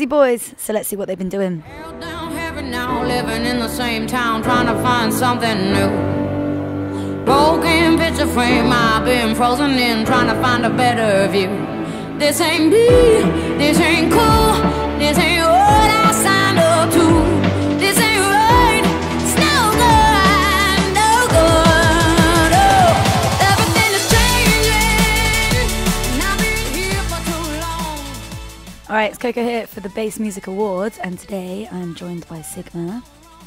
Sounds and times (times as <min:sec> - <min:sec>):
Song: 0:12.6 - 0:28.9.